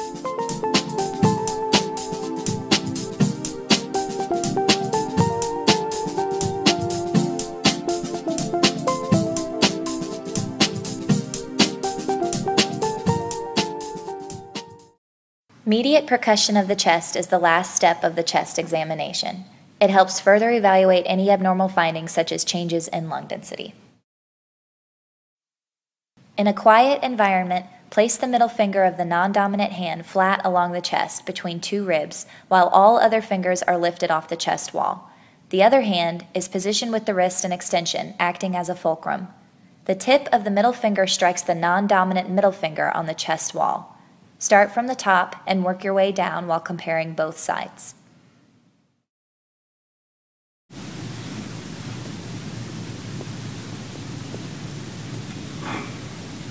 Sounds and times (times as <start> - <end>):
Speech: 15.6 - 23.8, 26.4 - 48.0.